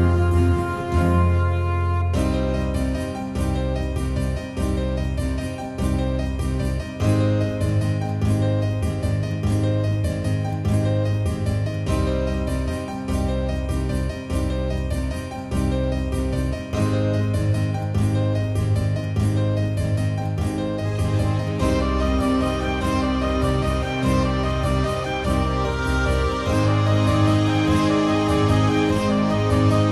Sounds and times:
Harpsichord: 0.0s - 29.9s.

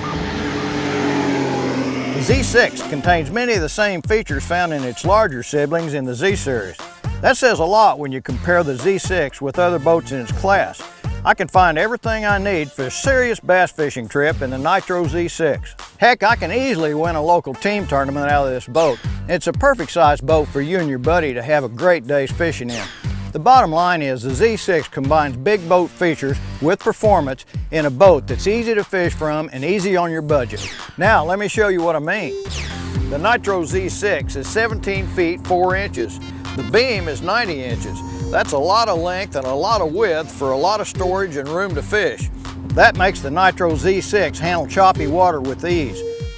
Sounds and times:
Music: 0.0s - 46.3s
Speech: 2.2s - 32.4s, 33.1s - 46.0s.

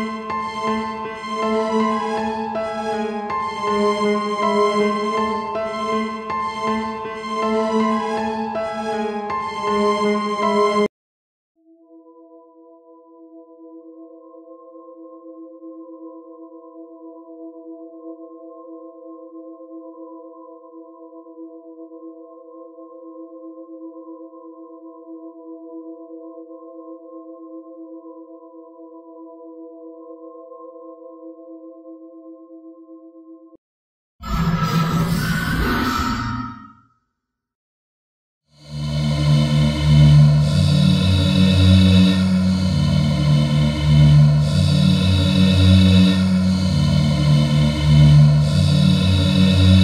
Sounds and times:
Sound effect: 34.2s - 36.8s, 38.6s - 49.8s.

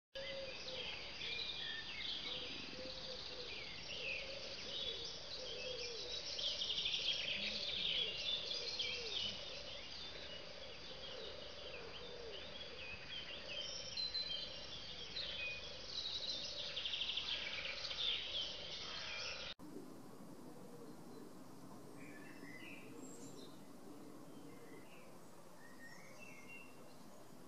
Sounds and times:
Insect: 0.2s - 27.4s
Outside, rural or natural: 0.2s - 27.4s.

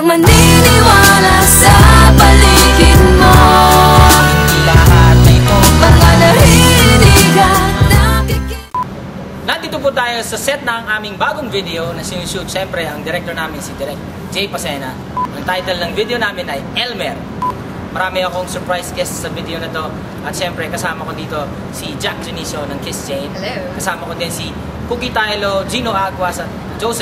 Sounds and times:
Speech: 18.0s - 27.0s.

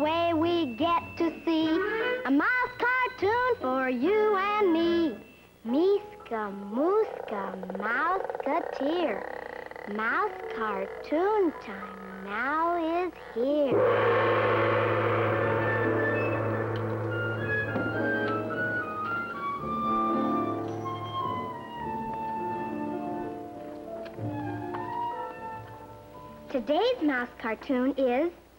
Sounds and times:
Music: 0.0s - 9.8s, 13.6s - 28.5s.

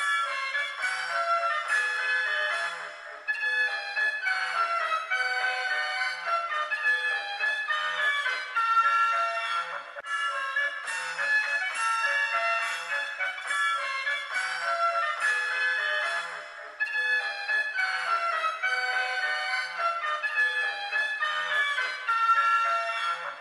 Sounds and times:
Music: 0.0s - 23.4s.

